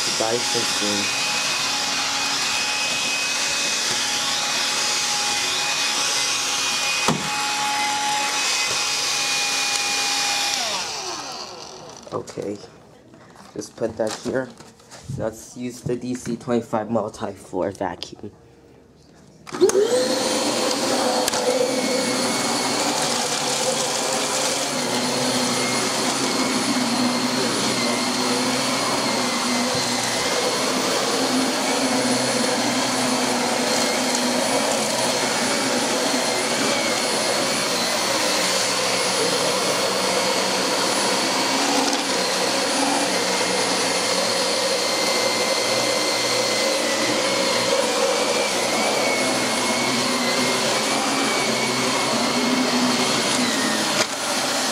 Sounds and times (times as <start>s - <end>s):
Vacuum cleaner: 0.0s - 12.5s, 19.5s - 54.7s.